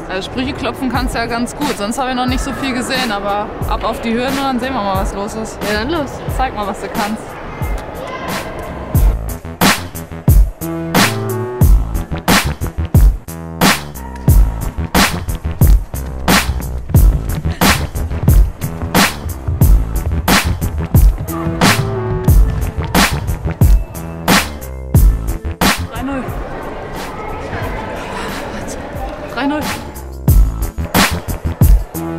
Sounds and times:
Inside, large room or hall: 0.0s - 32.1s
Music: 0.0s - 32.1s.

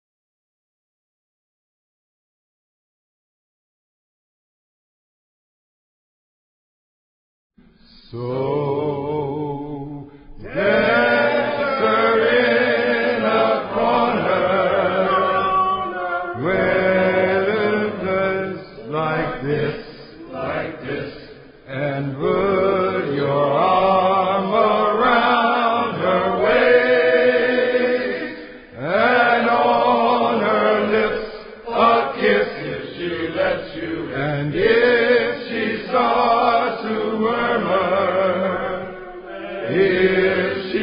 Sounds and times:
Mantra: 7.8s - 40.8s.

